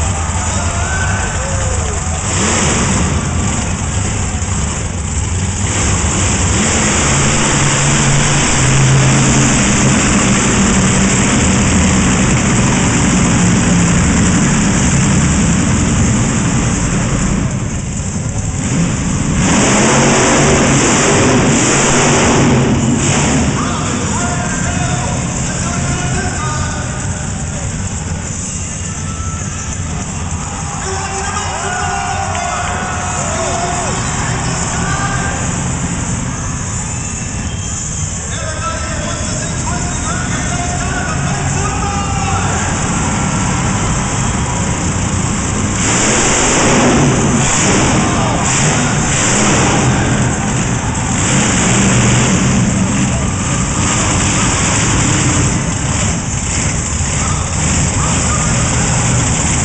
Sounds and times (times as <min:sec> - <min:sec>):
Vehicle: 0:00.0 - 0:59.6
Speech: 0:23.6 - 0:27.7, 0:30.7 - 0:34.0, 0:34.6 - 0:35.5, 0:38.3 - 0:42.8, 0:57.1 - 0:59.1.